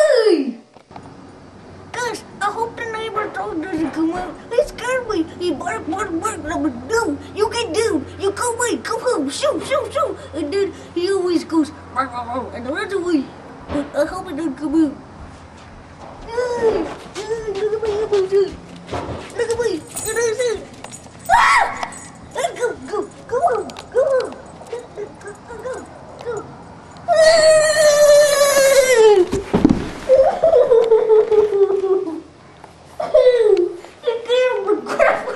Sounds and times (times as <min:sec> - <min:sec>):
Speech: 0:01.9 - 0:15.0, 0:16.3 - 0:18.6, 0:19.4 - 0:20.7, 0:22.4 - 0:26.5, 0:34.0 - 0:35.0.